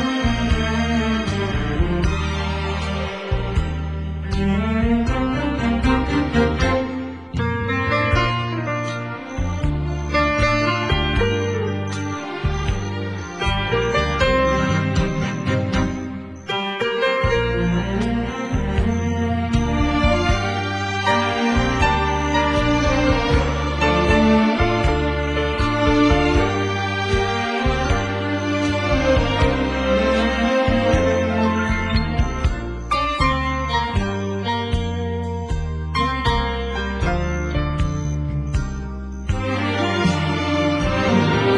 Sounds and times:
Music: 0.0s - 41.5s.

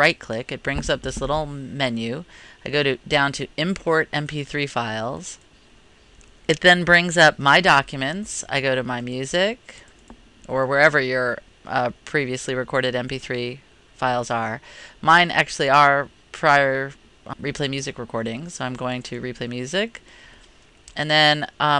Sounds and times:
Speech: 0.0s - 5.4s, 6.5s - 9.8s, 10.5s - 20.0s, 20.9s - 21.7s.

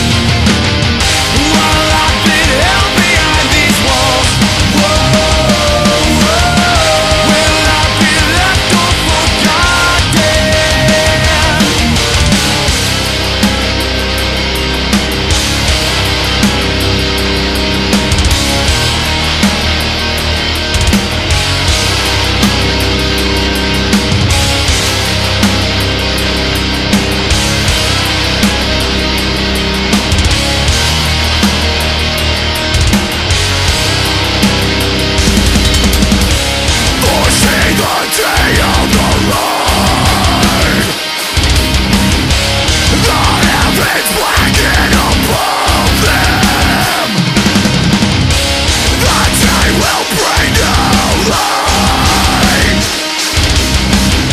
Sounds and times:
Angry music: 0.0s - 54.3s.

